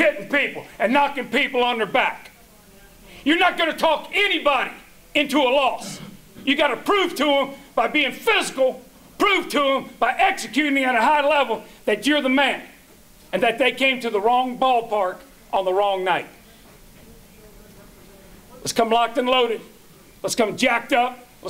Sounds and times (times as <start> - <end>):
Speech: 0.0 - 21.4.